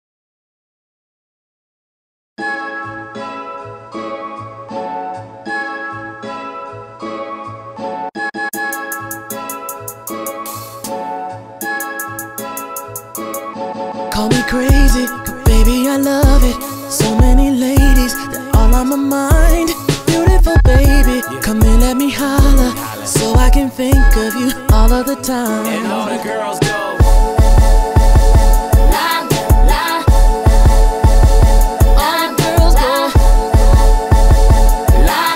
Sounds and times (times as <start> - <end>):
Independent music: 2.4 - 35.3
Tender music: 2.4 - 35.3.